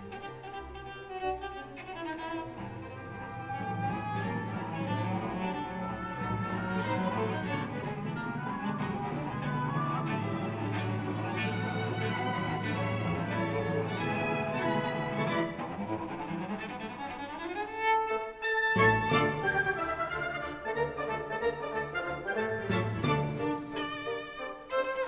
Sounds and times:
Violin, fiddle: 0.0s - 25.0s.

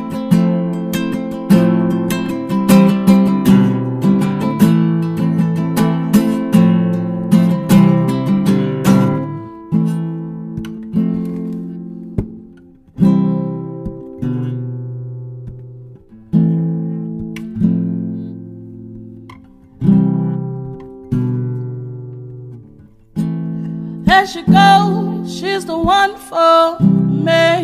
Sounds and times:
Acoustic guitar: 0.0s - 27.6s.

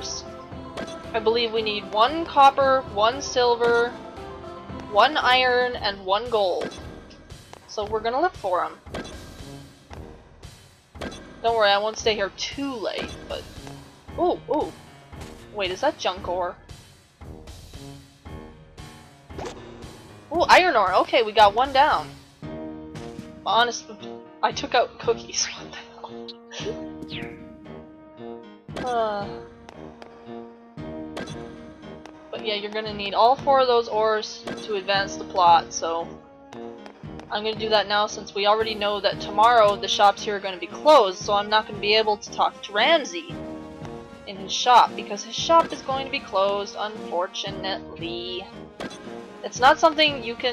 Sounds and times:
Speech: 0.0s - 0.2s, 1.2s - 4.0s, 4.9s - 6.7s, 7.7s - 8.8s, 11.4s - 13.4s, 14.2s - 14.7s, 15.6s - 16.6s, 20.3s - 22.1s, 23.5s - 26.8s, 28.8s - 29.4s, 32.4s - 36.1s, 37.3s - 43.4s, 44.3s - 48.5s, 49.5s - 50.5s
Music: 0.0s - 50.5s.

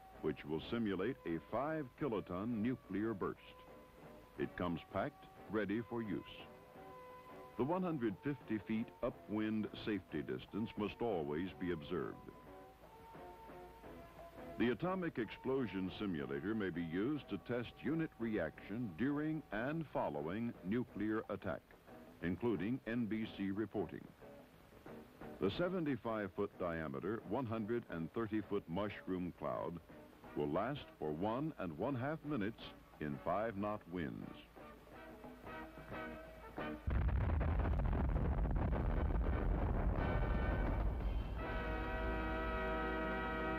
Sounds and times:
Music: 0.0s - 43.5s
Speech: 0.2s - 3.6s, 4.4s - 6.5s, 7.6s - 12.3s, 14.6s - 24.1s, 25.4s - 29.8s, 30.4s - 34.5s
Burst, pop: 36.9s - 41.3s.

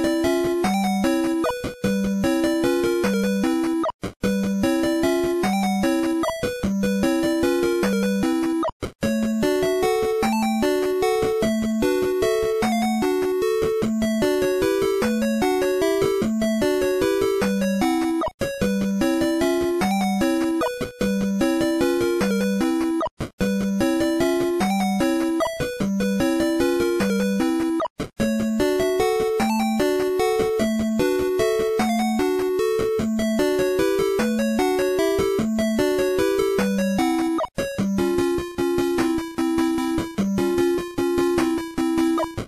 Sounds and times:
Music: 0.0s - 42.4s.

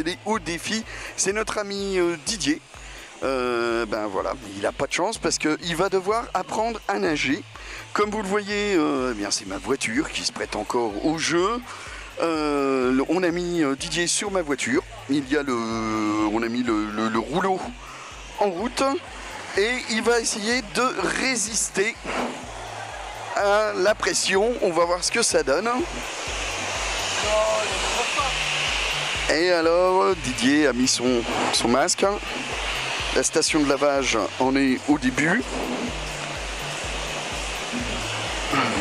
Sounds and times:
Speech: 0.0s - 2.6s, 3.2s - 17.8s, 18.4s - 22.0s, 23.4s - 25.9s, 27.2s - 28.4s, 29.3s - 32.2s, 33.2s - 35.5s.

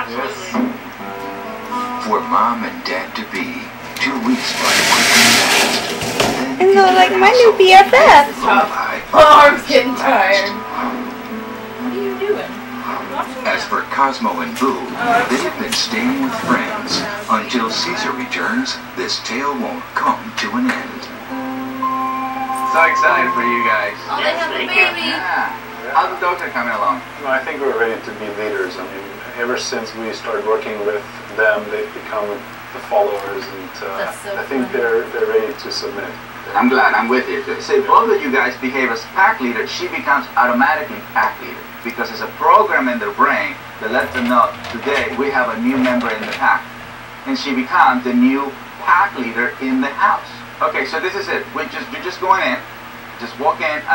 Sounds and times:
Music: 0.9s - 5.7s, 9.2s - 15.5s, 16.4s - 29.0s
Speech: 2.0s - 5.8s, 6.4s - 11.0s, 12.0s - 21.2s, 22.7s - 46.7s, 47.3s - 53.9s.

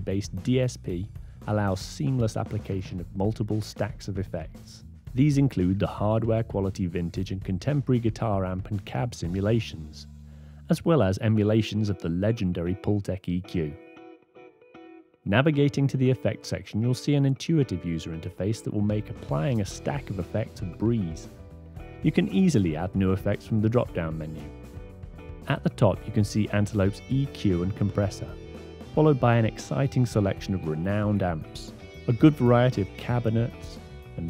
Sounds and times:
Speech: 0.0s - 10.1s, 10.7s - 13.8s, 15.3s - 21.3s, 22.0s - 24.5s, 25.5s - 28.4s, 29.0s - 34.2s
Music: 0.0s - 34.2s.

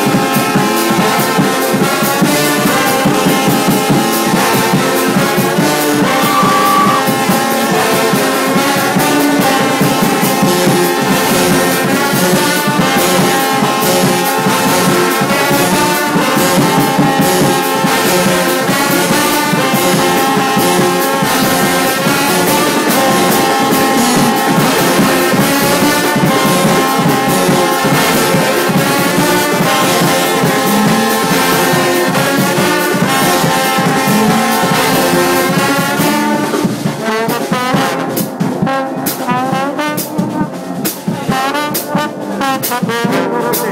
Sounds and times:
Brass instrument: 0.0s - 43.7s.

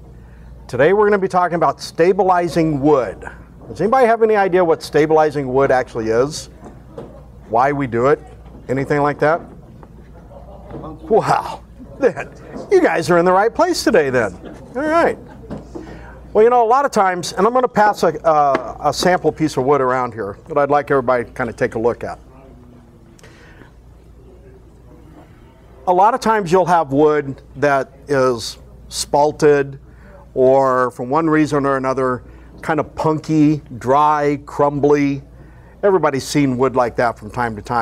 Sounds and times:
Speech: 0.7s - 6.6s, 7.4s - 9.5s, 10.2s - 15.3s, 16.2s - 22.9s, 24.1s - 37.8s.

